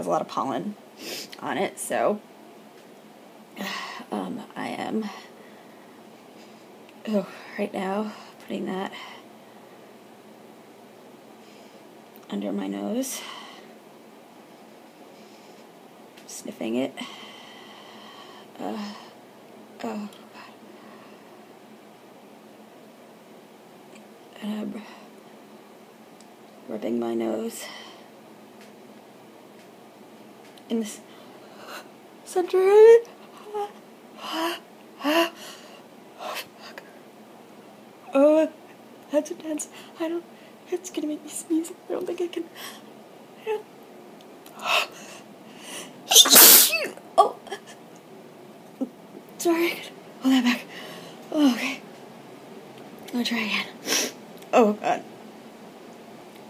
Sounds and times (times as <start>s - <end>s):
Speech: 38.1s - 42.5s
Sneeze: 46.1s - 47.0s.